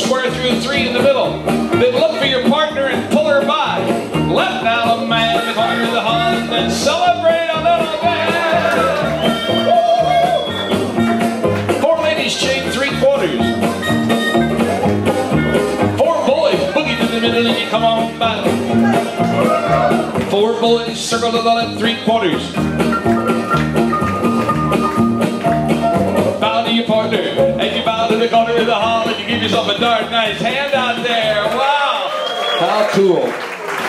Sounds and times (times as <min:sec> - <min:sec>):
Crowd: 0:00.0 - 0:33.8.